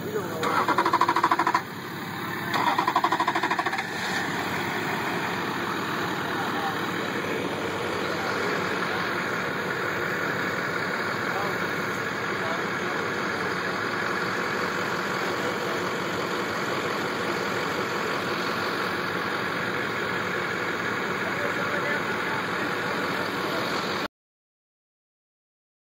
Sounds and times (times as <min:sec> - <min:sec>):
Idling: 0:00.0 - 0:24.1
Truck: 0:00.0 - 0:24.1.